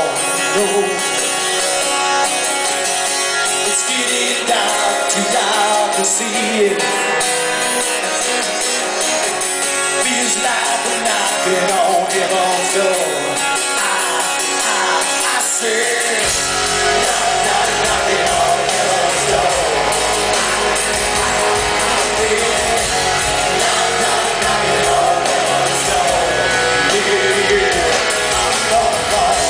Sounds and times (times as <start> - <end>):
Music: 0.0 - 29.5
Male singing: 3.6 - 7.0, 10.0 - 29.5.